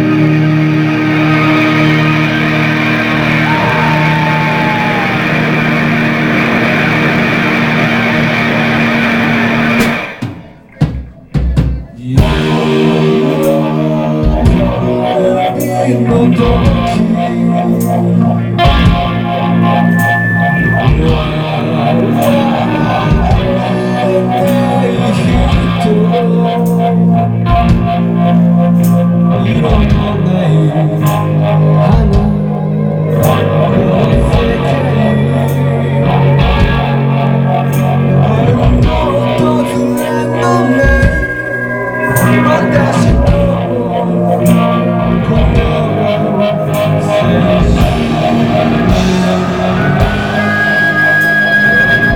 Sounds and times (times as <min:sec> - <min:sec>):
Music: 0:00.0 - 0:52.1.